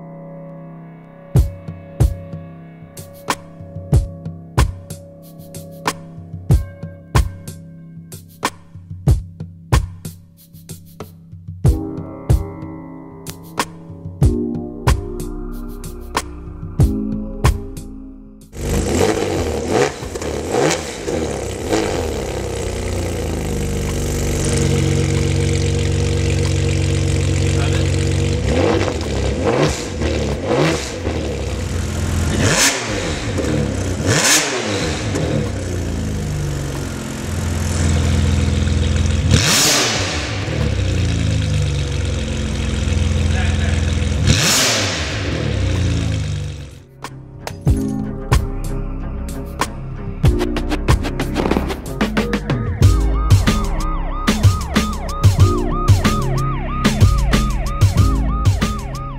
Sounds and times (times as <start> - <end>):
Speech: 27.6 - 28.0, 43.3 - 44.0.